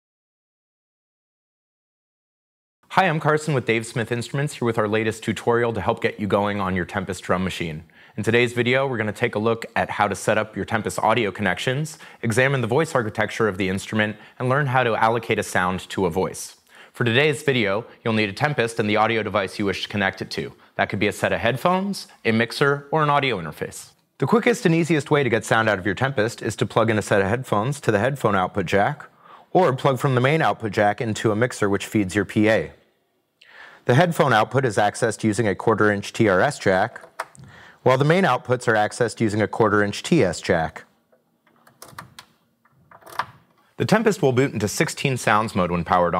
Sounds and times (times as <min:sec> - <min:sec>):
Speech: 0:02.9 - 0:32.8, 0:33.8 - 0:37.2, 0:37.8 - 0:41.0, 0:43.8 - 0:46.1.